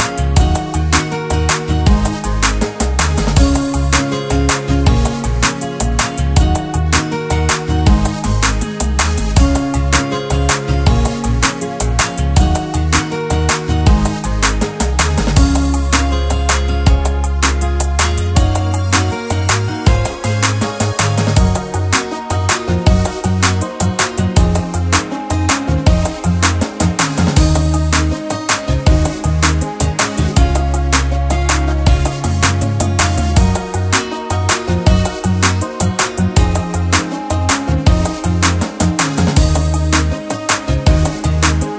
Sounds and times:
Jazz: 0.0s - 41.7s.

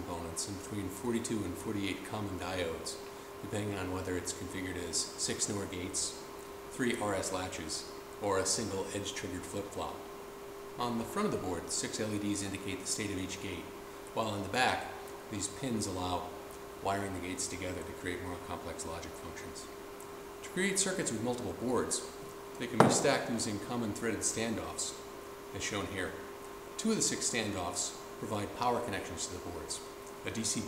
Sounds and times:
Speech: 0.0s - 10.0s, 10.8s - 19.8s, 20.4s - 26.2s, 26.8s - 30.6s.

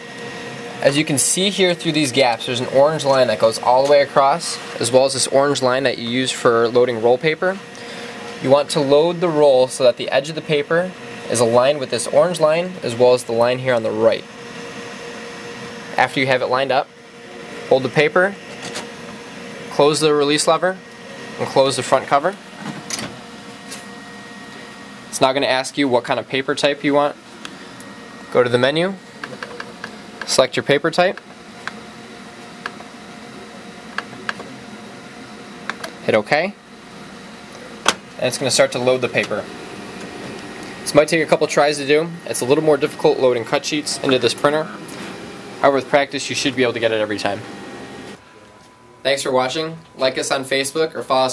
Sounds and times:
Printer: 0.0s - 51.3s
Speech: 0.8s - 7.6s, 8.3s - 14.3s, 15.9s - 16.9s, 17.7s - 18.4s, 19.7s - 22.4s, 25.1s - 27.2s, 28.3s - 29.6s, 30.2s - 31.2s, 36.0s - 36.6s, 38.2s - 39.5s, 40.8s - 44.9s, 45.6s - 47.5s, 48.3s - 51.3s.

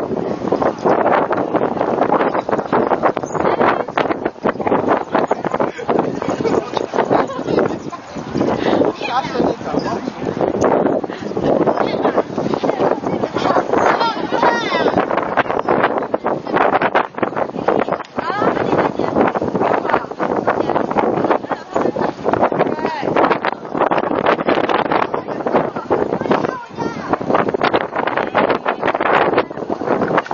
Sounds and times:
Speech: 5.0s - 10.4s, 17.5s - 23.8s, 24.7s - 27.3s.

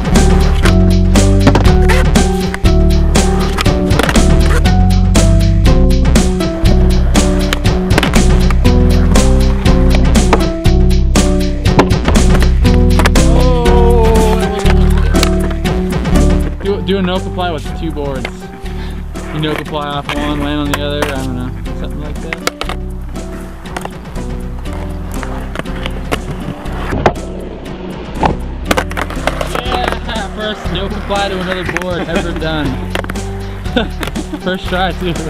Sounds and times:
Skateboard: 0.2s - 2.6s, 3.2s - 4.7s, 22.3s - 22.8s, 23.4s - 35.3s.

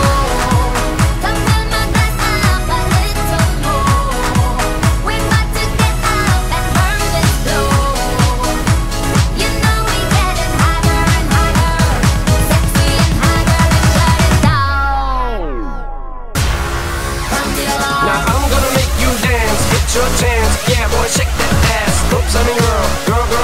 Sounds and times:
Pop music: 0.0s - 23.4s.

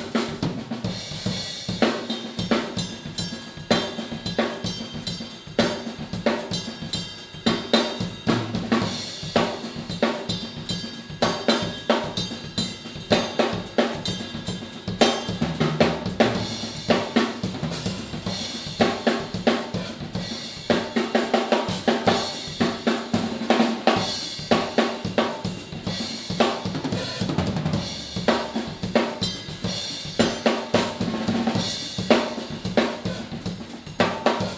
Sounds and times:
Drum kit: 0.0s - 34.5s
Drum roll: 0.0s - 34.5s
Bass drum: 14.0s - 20.9s, 25.8s - 34.5s.

